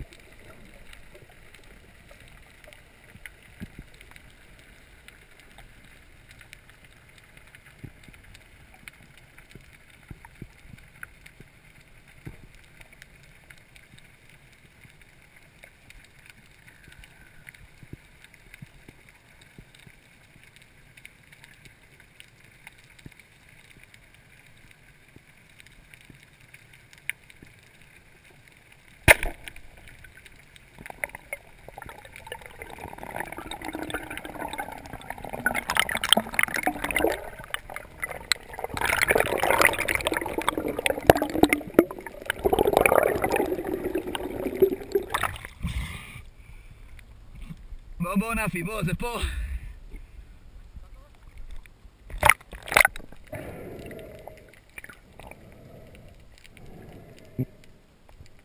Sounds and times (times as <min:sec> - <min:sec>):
Gurgling: 0:30.9 - 0:46.0, 0:52.1 - 0:57.7.